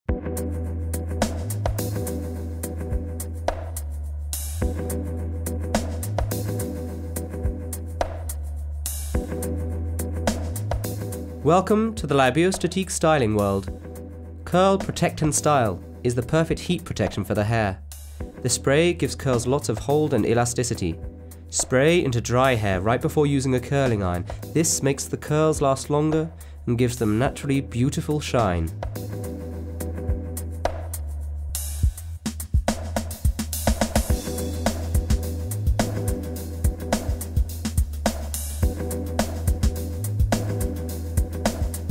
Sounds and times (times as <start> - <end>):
Music: 0.1 - 41.9
Speech: 11.4 - 13.7, 14.5 - 17.8, 18.4 - 28.8.